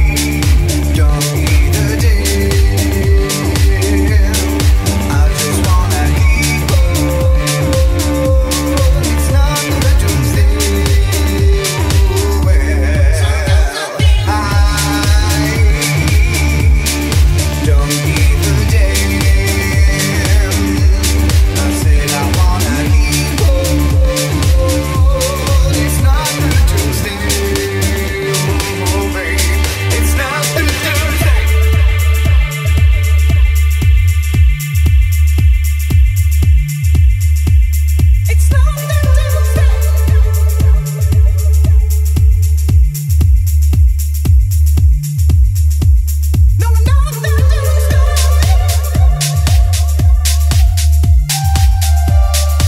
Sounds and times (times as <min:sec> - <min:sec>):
Funk: 0:00.0 - 0:52.6.